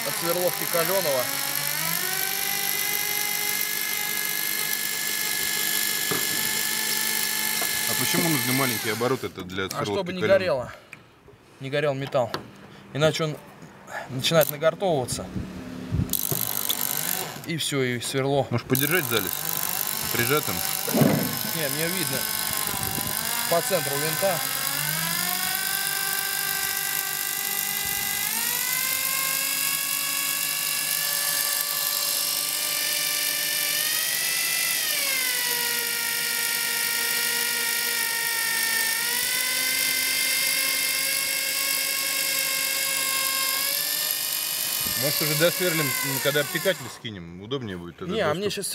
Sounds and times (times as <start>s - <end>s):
Drill: 0.0s - 9.4s, 16.1s - 17.5s, 18.7s - 47.0s.